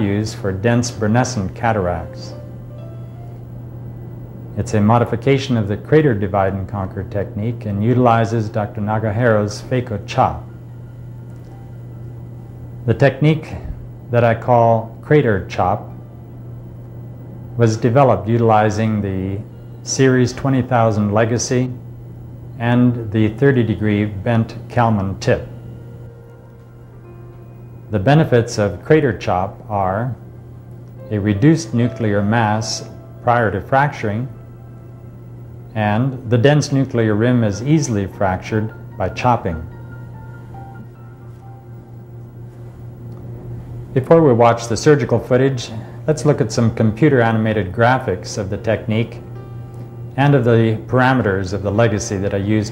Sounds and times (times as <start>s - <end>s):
Speech: 0.0s - 2.4s, 4.6s - 10.5s, 12.9s - 16.0s, 17.6s - 21.8s, 22.6s - 25.5s, 27.9s - 30.2s, 31.1s - 34.3s, 35.8s - 39.7s, 44.0s - 49.2s, 50.2s - 52.7s.